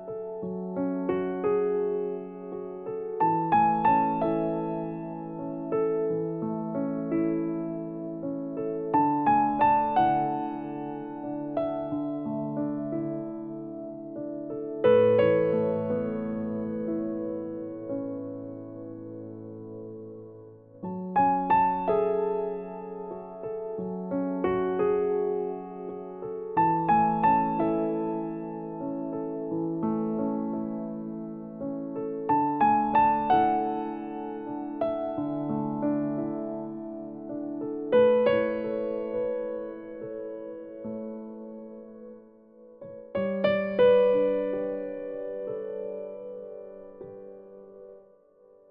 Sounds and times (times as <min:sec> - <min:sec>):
Piano: 0:00.0 - 0:48.7.